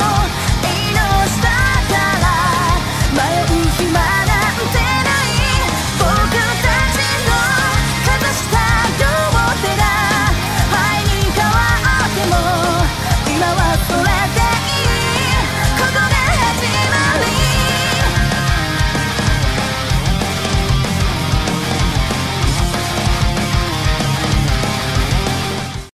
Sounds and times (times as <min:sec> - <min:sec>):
Music: 0:00.0 - 0:25.9.